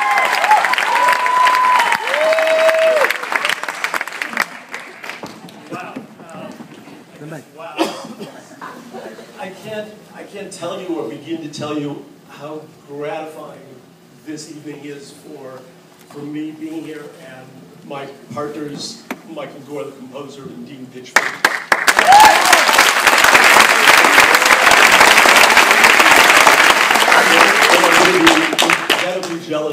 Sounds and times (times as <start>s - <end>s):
Male speech, man speaking: 9.4s - 21.2s, 27.3s - 29.7s.